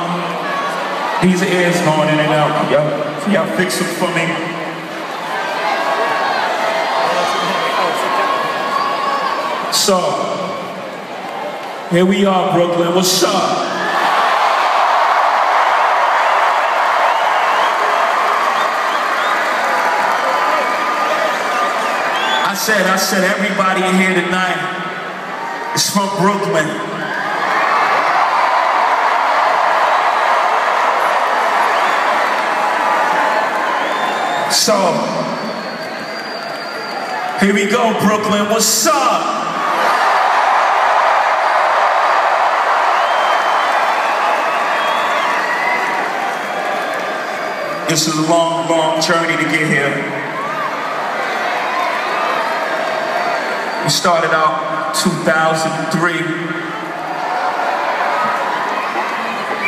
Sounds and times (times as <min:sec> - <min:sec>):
Male speech, man speaking: 0:01.2 - 0:04.6, 0:09.7 - 0:10.6, 0:11.9 - 0:13.7, 0:22.4 - 0:24.8, 0:25.8 - 0:26.9, 0:34.5 - 0:35.3, 0:37.4 - 0:39.4, 0:47.9 - 0:50.2, 0:53.8 - 0:56.6.